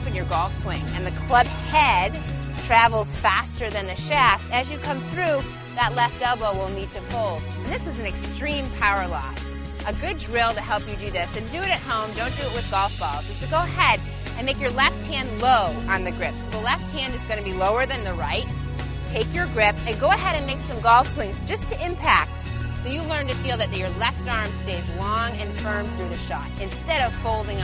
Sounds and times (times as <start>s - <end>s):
Speech: 0.0s - 18.5s, 19.1s - 27.6s
Music: 0.0s - 27.6s.